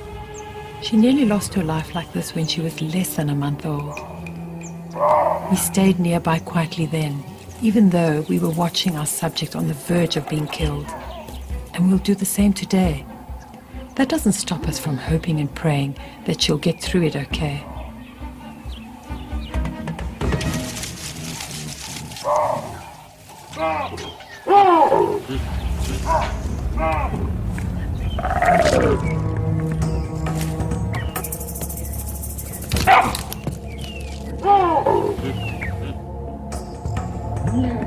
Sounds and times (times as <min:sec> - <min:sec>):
Music: 0:00.0 - 0:37.8
Roaring cats (lions, tigers): 0:05.0 - 0:05.7, 0:21.9 - 0:27.1, 0:28.2 - 0:29.2.